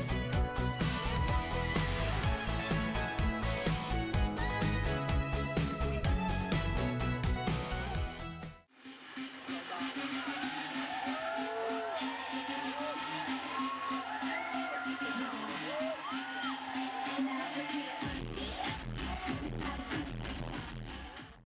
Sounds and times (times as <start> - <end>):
Music: 0.0 - 21.4.